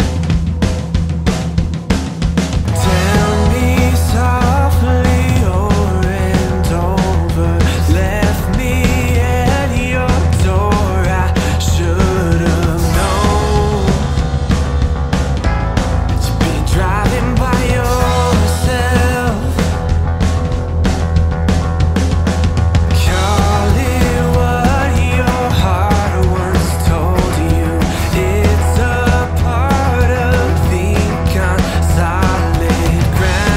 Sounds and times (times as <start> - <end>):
Music: 0.0 - 33.5.